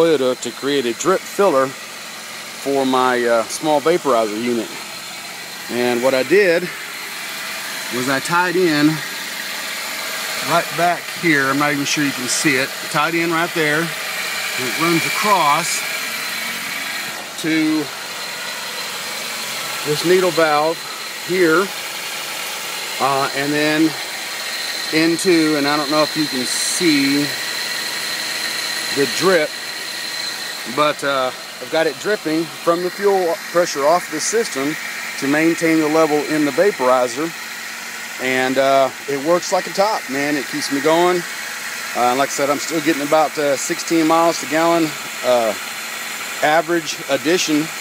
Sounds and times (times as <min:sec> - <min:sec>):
Speech: 0:00.0 - 0:01.8, 0:02.6 - 0:04.8, 0:05.7 - 0:06.8, 0:07.9 - 0:09.0, 0:10.4 - 0:14.0, 0:14.6 - 0:15.9, 0:17.4 - 0:17.9, 0:19.8 - 0:21.7, 0:23.0 - 0:24.0, 0:24.9 - 0:27.4, 0:28.9 - 0:29.6, 0:30.7 - 0:37.4, 0:38.2 - 0:41.3, 0:42.0 - 0:45.6, 0:46.4 - 0:47.8
Engine: 0:00.0 - 0:47.8.